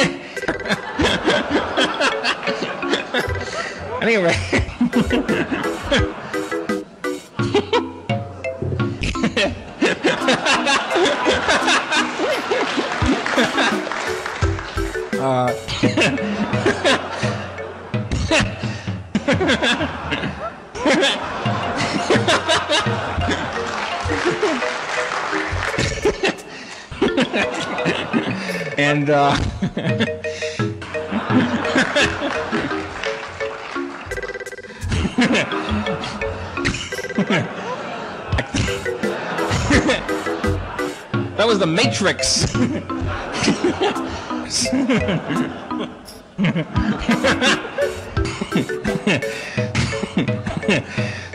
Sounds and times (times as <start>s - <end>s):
Music: 0.0s - 4.0s, 4.9s - 19.2s, 21.2s - 37.4s, 38.6s - 51.3s.